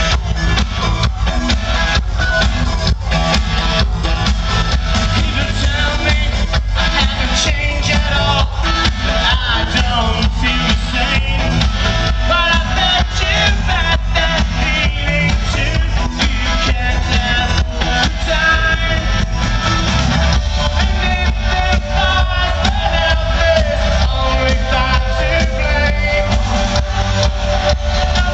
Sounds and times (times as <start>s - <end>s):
Music: 0.0s - 28.3s.